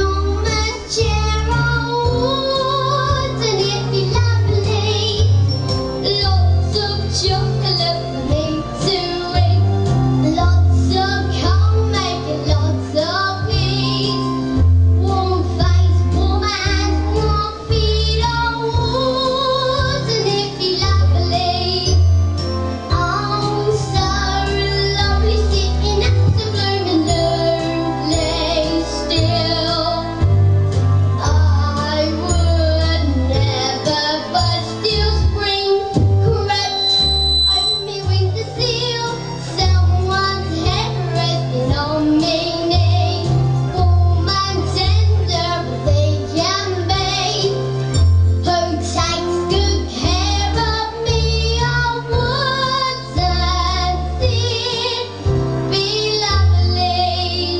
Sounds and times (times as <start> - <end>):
Child singing: 0.0 - 14.4, 15.0 - 22.0, 22.9 - 30.2, 31.2 - 47.6, 48.4 - 57.6
Music: 0.0 - 57.6.